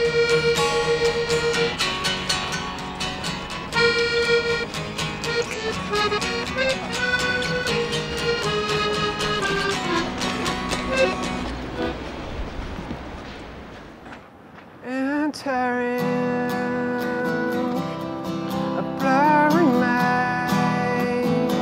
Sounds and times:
Music: 0.0 - 12.0, 16.0 - 21.6.

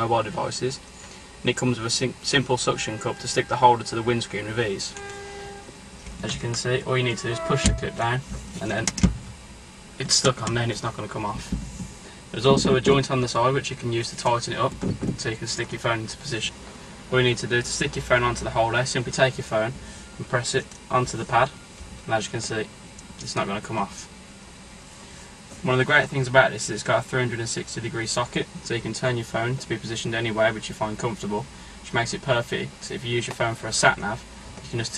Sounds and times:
Speech: 0.0 - 0.8, 1.4 - 5.0, 6.2 - 9.0, 10.0 - 11.6, 12.3 - 24.1, 25.6 - 34.9.

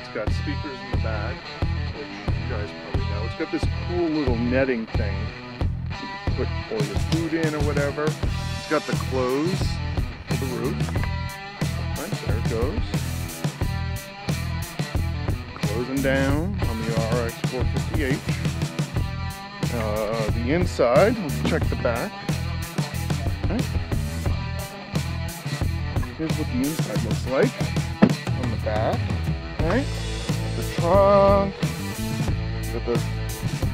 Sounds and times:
Speech: 0.0 - 5.3, 6.3 - 11.0, 11.9 - 13.0, 15.6 - 18.4, 19.7 - 22.2, 23.3 - 23.8, 26.1 - 27.6, 28.3 - 29.9, 30.6 - 31.5, 32.7 - 33.1
Music: 0.0 - 33.7.

